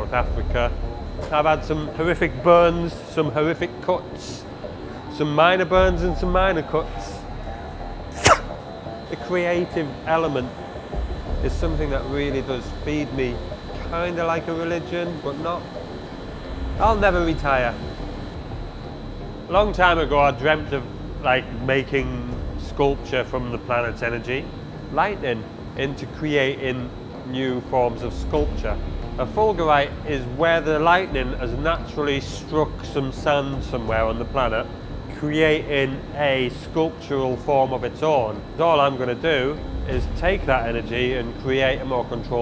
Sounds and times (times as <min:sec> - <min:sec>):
Speech: 0:00.0 - 0:04.5, 0:05.1 - 0:07.3, 0:09.1 - 0:10.6, 0:11.4 - 0:15.7, 0:16.8 - 0:17.8, 0:19.5 - 0:42.4.